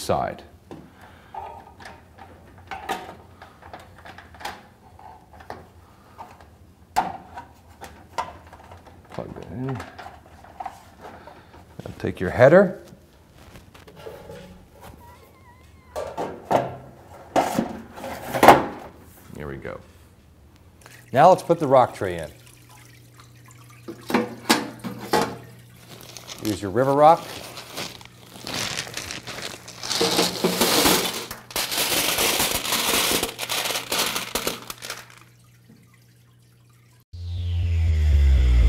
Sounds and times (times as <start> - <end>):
Speech: 0.0 - 0.5, 9.2 - 9.9, 11.8 - 12.9, 19.3 - 19.9, 21.1 - 22.4, 26.4 - 27.3.